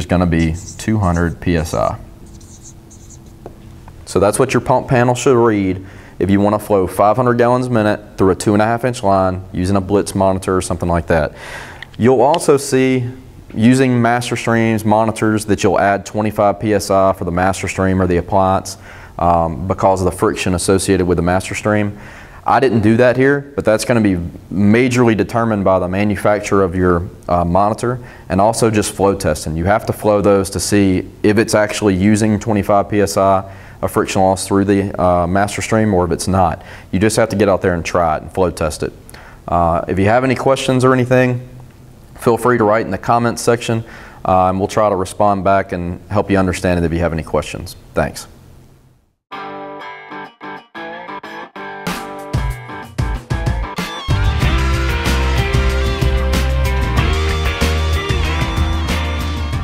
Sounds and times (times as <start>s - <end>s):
Speech: 0.0s - 2.0s, 4.1s - 11.4s, 12.0s - 41.6s, 42.2s - 48.4s
Distortion: 0.0s - 59.6s
Music: 49.3s - 59.6s.